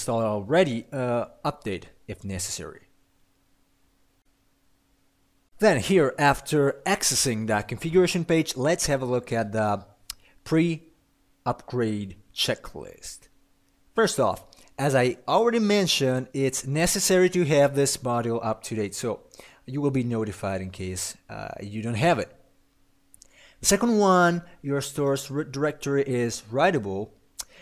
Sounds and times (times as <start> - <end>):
Narration, monologue: 0.0 - 27.6.